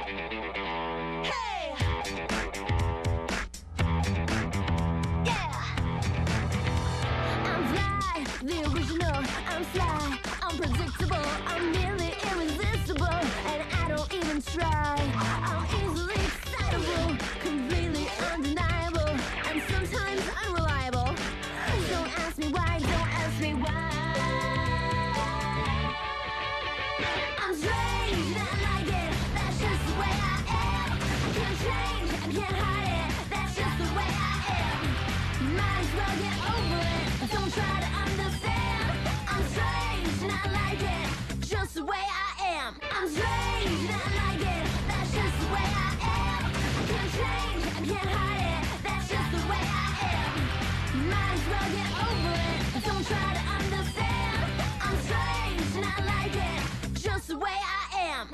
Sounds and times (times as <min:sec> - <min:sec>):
Music: 0:00.0 - 0:58.3.